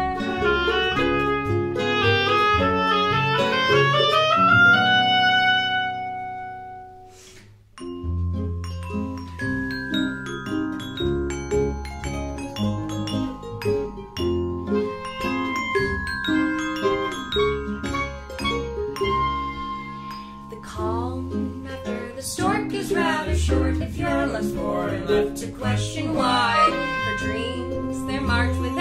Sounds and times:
Classical music: 0.0 - 7.2, 7.8 - 28.8
Guitar: 0.0 - 28.8
Inside, small room: 0.0 - 28.8
Glockenspiel: 7.8 - 28.8.

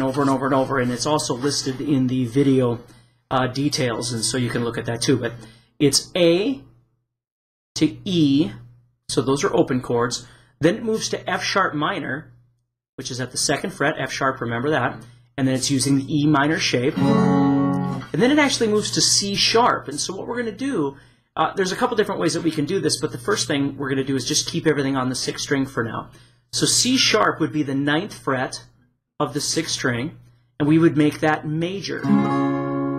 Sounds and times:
Speech: 0.0 - 6.7, 7.8 - 12.4, 13.0 - 17.0, 18.1 - 32.1.

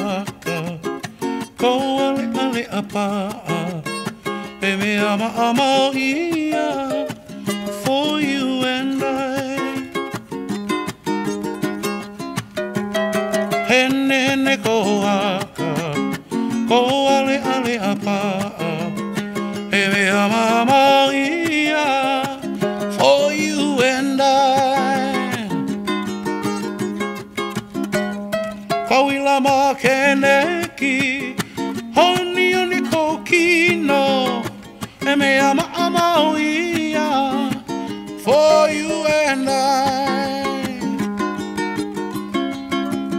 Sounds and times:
Music: 0.0 - 43.1.

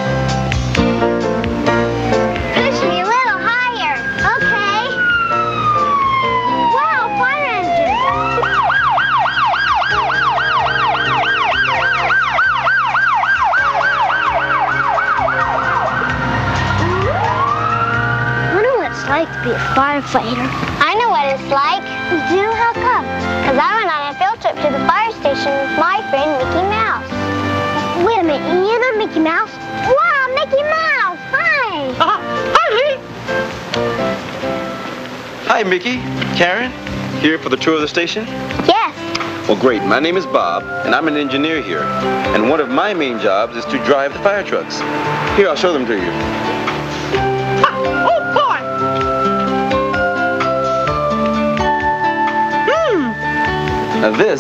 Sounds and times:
Music: 0.0 - 54.4.

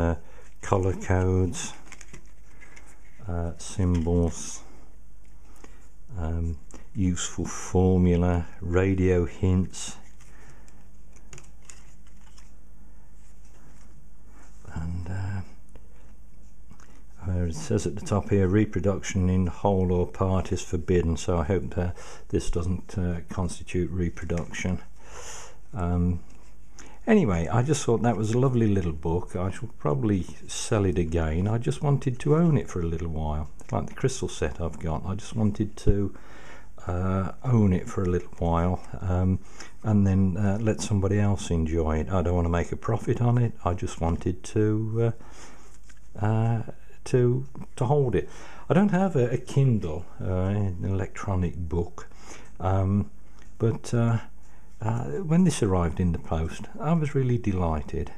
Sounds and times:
Speech: 0.0 - 1.9, 3.2 - 4.7, 6.1 - 10.0, 14.7 - 15.6, 17.2 - 24.9, 25.7 - 26.3, 27.0 - 36.2, 36.8 - 45.2, 46.2 - 58.1.

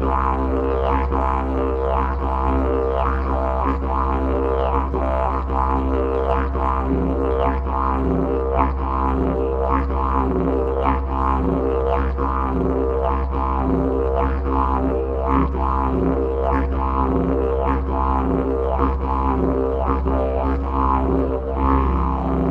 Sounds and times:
Didgeridoo: 0.0 - 22.5.

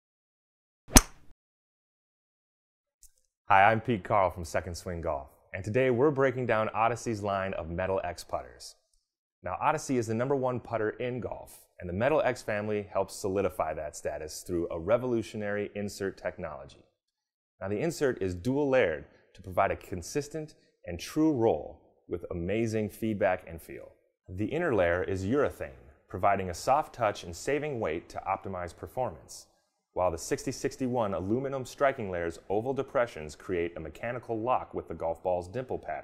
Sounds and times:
Speech: 3.5 - 8.8, 9.4 - 16.8, 17.6 - 36.0.

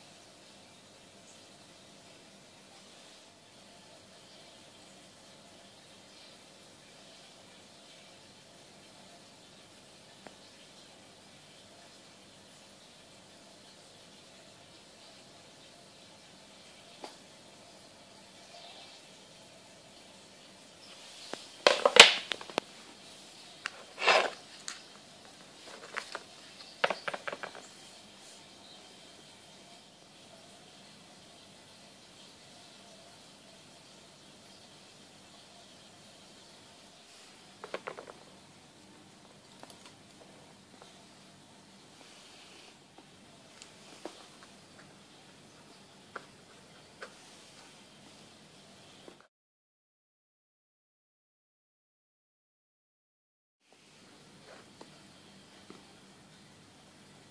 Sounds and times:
Inside, small room: 0.0 - 49.3, 53.6 - 57.3.

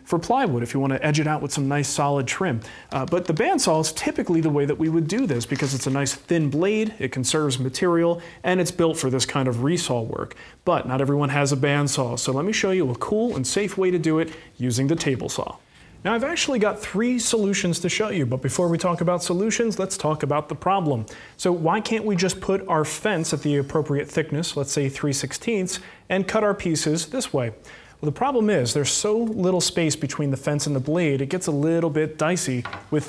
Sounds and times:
Speech: 0.0 - 33.0.

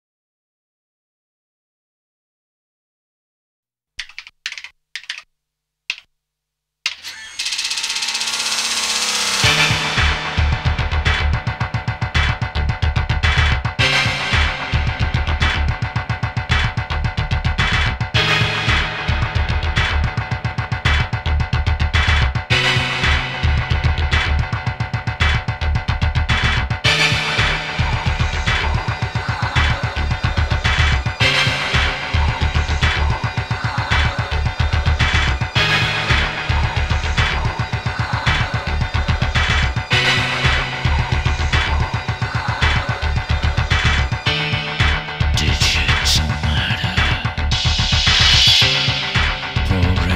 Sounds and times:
Music: 7.0 - 50.1.

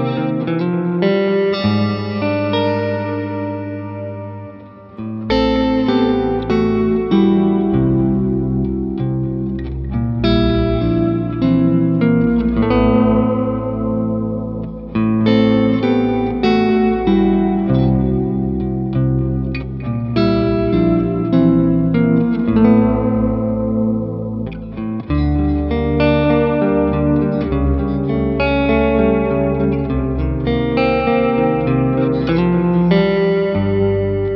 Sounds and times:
Music: 0.0 - 34.3.

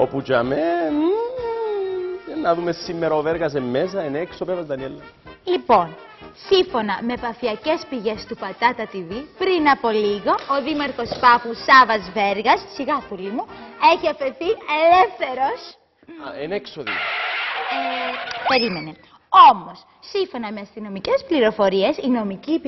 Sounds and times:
Music: 0.0 - 17.0, 20.6 - 22.6
Female speech, woman speaking: 5.5 - 15.8, 17.7 - 22.6.

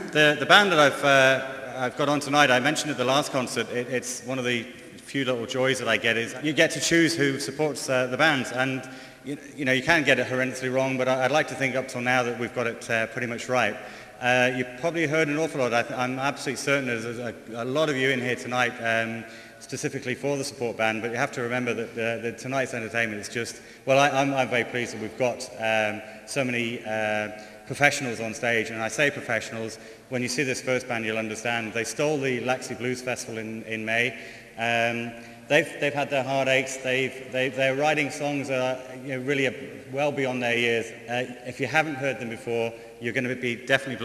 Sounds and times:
Speech: 0.0 - 44.0.

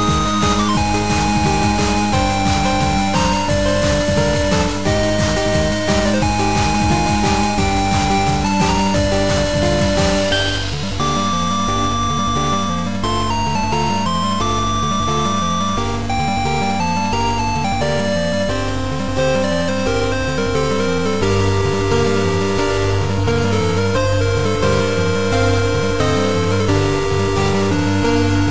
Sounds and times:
Music: 0.0 - 28.5.

